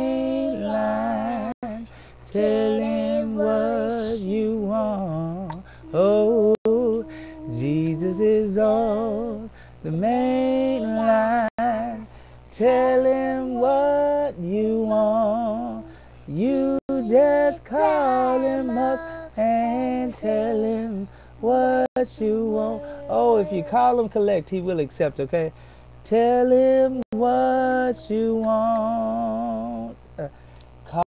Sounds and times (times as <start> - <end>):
Child singing: 0.0 - 4.5, 5.9 - 9.3, 10.0 - 12.0, 12.6 - 20.8, 22.2 - 24.0, 27.2 - 29.8
Male singing: 0.0 - 24.3, 26.1 - 30.3.